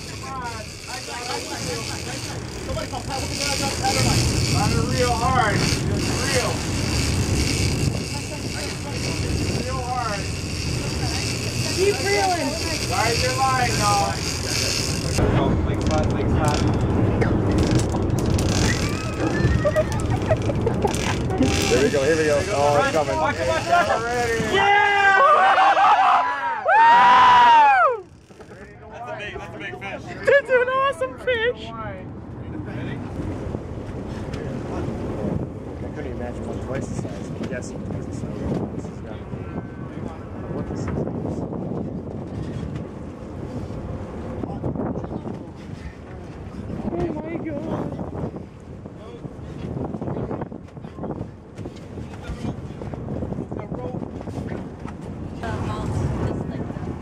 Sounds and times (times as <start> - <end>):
Ocean: 0.0 - 57.0.